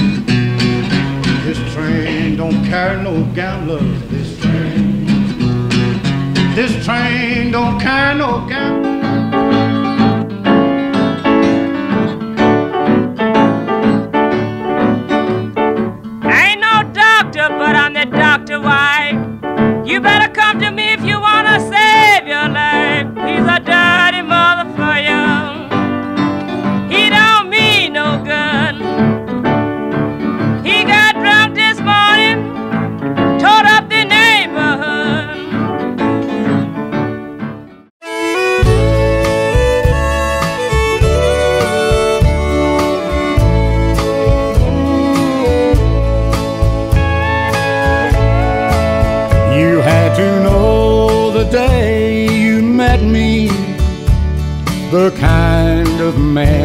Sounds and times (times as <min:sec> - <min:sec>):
Music: 0:00.0 - 0:56.6.